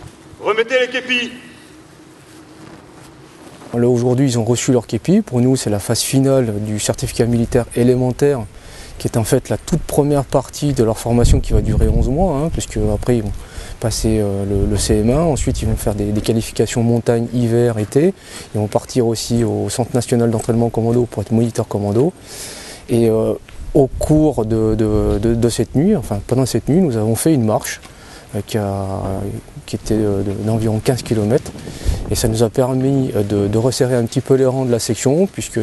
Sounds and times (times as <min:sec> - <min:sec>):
Speech: 0:00.4 - 0:01.7, 0:03.7 - 0:22.2, 0:22.9 - 0:31.5, 0:32.1 - 0:35.6.